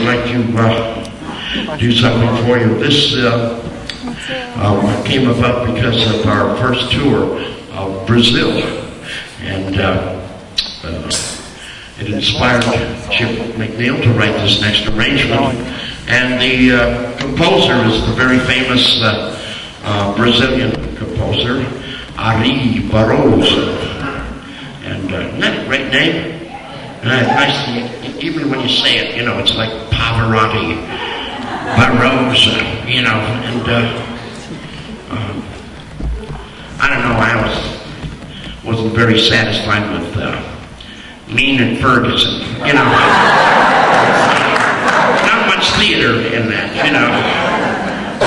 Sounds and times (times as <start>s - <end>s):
Male speech, man speaking: 0.0s - 1.0s, 1.6s - 3.6s, 4.3s - 26.4s, 27.0s - 30.9s, 31.7s - 34.2s, 35.1s - 35.5s, 36.8s - 37.9s, 38.6s - 40.6s, 41.3s - 43.2s, 44.1s - 47.4s.